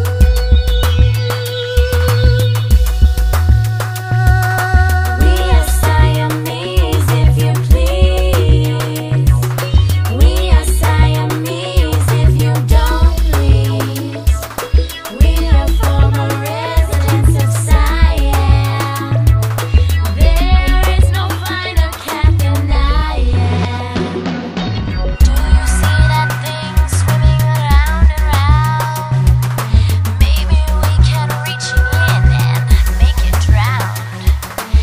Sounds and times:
Music: 0:00.0 - 0:34.8.

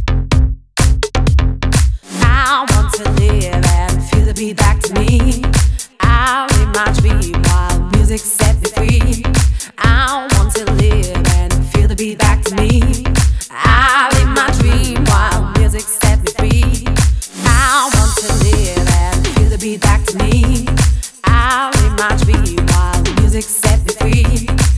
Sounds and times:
Music: 0:00.0 - 0:24.7.

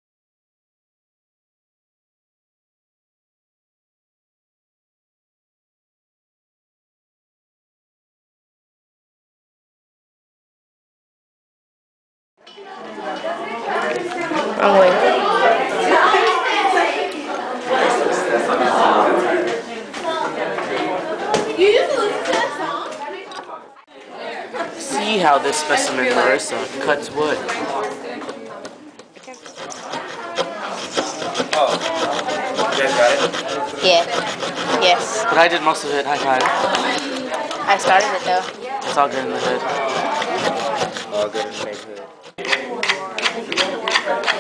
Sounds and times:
Speech: 0:12.6 - 0:44.4.

